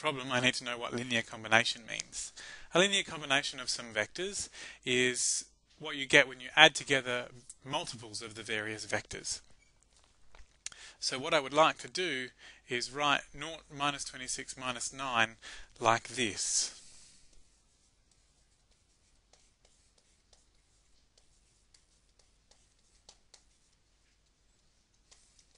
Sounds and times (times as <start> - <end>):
Speech: 0.0 - 9.4, 11.0 - 16.8.